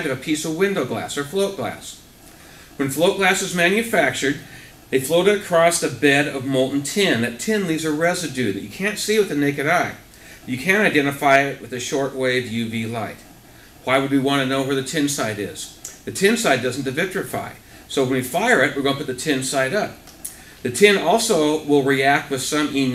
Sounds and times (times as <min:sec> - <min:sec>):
Speech: 0:00.0 - 0:02.0, 0:02.8 - 0:13.2, 0:13.8 - 0:20.0, 0:20.6 - 0:22.9.